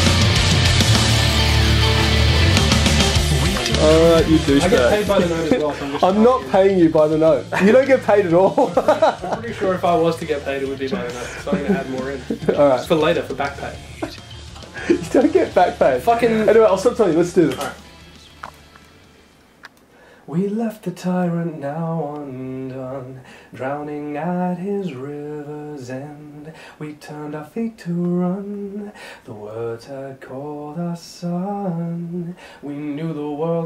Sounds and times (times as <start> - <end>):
Speech: 3.8 - 14.2, 15.0 - 17.8.